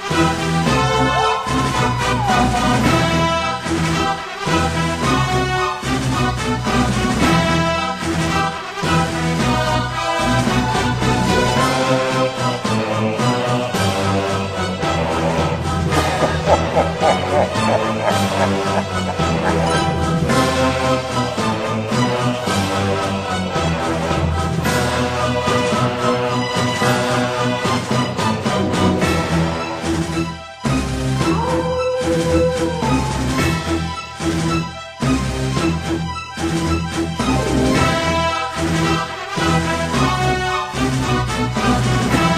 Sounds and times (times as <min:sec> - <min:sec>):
Music: 0:00.0 - 0:42.3.